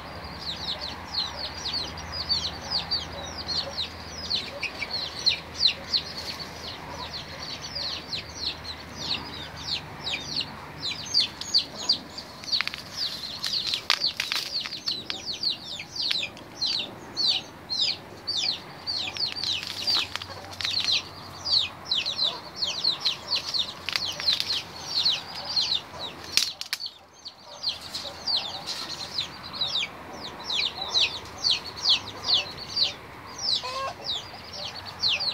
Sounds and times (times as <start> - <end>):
Bird: 0.0 - 35.3.